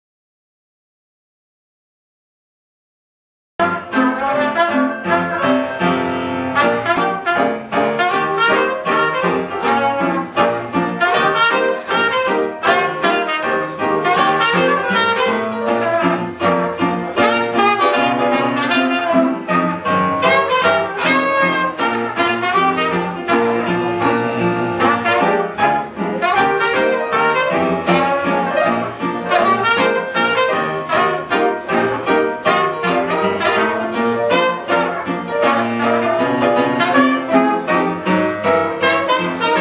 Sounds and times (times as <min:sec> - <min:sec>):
Blues: 0:03.6 - 0:39.6.